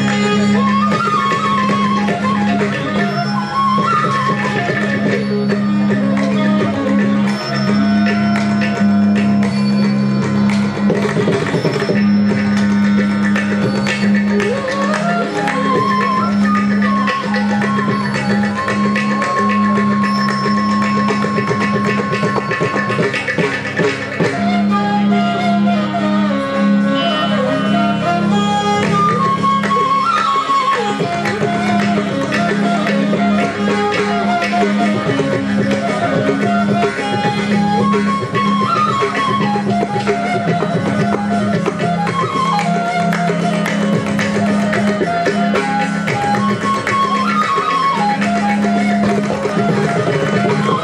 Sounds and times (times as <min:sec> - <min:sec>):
Flute: 0:00.0 - 0:50.8
Traditional music: 0:00.0 - 0:50.8
Violin, fiddle: 0:00.0 - 0:50.8.